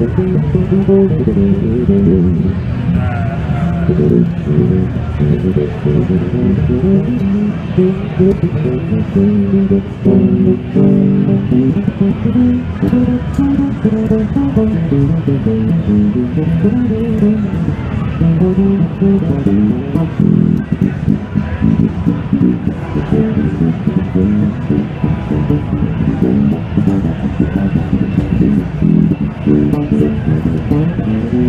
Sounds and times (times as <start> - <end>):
Bass guitar: 0.0 - 31.4.